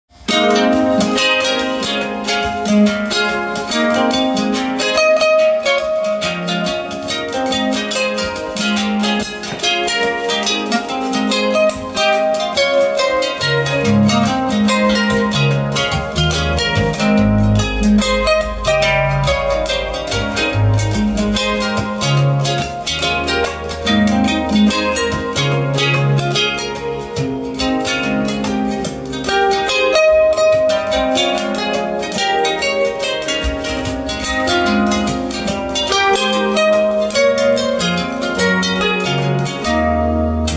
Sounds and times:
Bowed string instrument: 0.1 - 40.5
Harp: 0.1 - 40.5
Plucked string instrument: 0.1 - 40.5.

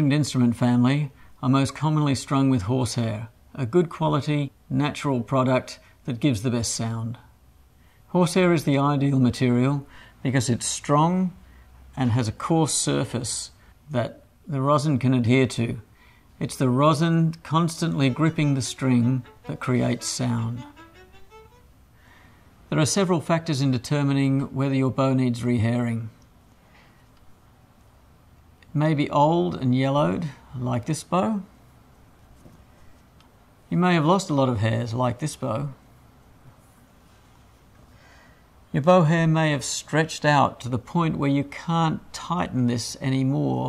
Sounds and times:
Speech: 0.0 - 7.4, 8.1 - 20.8, 22.7 - 26.2, 28.6 - 31.6, 33.7 - 35.8, 38.7 - 43.6
Violin, fiddle: 17.6 - 21.8.

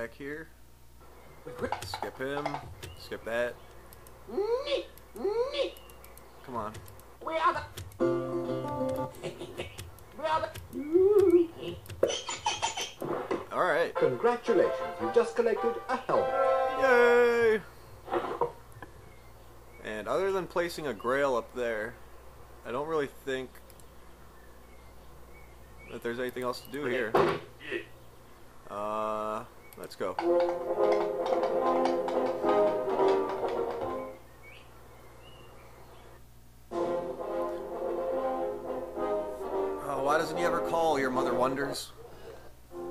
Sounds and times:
Speech: 0.0 - 0.6, 1.7 - 3.6, 6.4 - 7.7, 19.8 - 22.0, 25.9 - 27.9, 28.7 - 30.2, 39.8 - 42.0
Music: 8.0 - 9.2, 13.9 - 16.9, 30.2 - 34.2, 36.7 - 41.4.

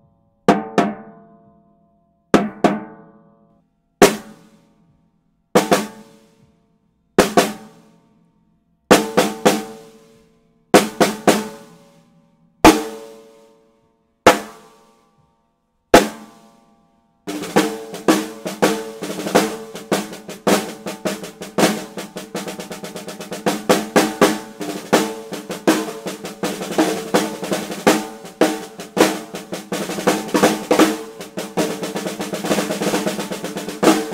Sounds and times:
Music: 0.0 - 34.1.

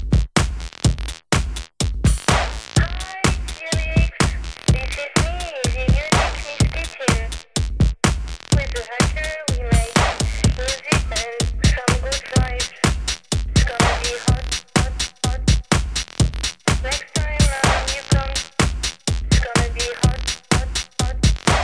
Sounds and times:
Music: 0.0 - 21.6
Static: 2.4 - 7.5, 8.4 - 14.8, 16.2 - 18.6, 21.4 - 21.6.

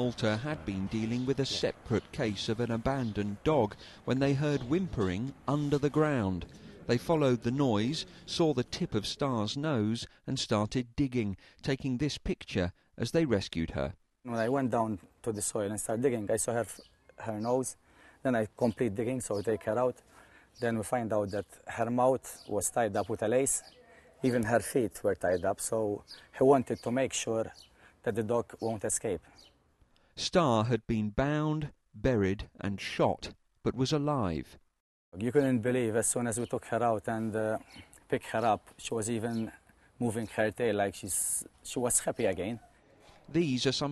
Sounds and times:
Speech: 0.0 - 20.0, 20.6 - 29.2, 30.2 - 34.6, 35.2 - 42.7, 43.3 - 43.9.

